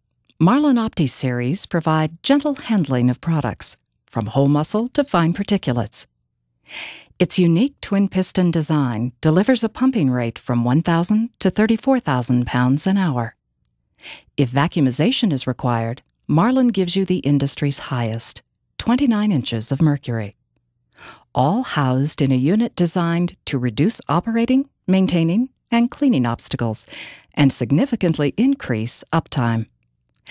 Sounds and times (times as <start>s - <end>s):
Speech: 0.4s - 6.1s, 7.2s - 13.4s, 14.1s - 20.4s, 21.3s - 29.7s.